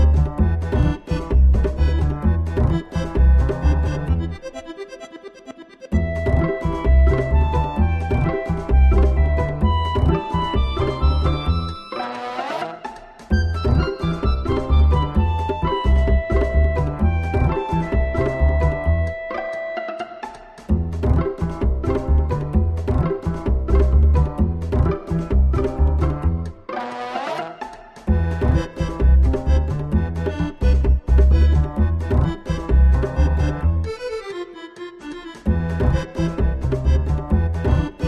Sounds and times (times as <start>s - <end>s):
Music: 0.0s - 38.0s.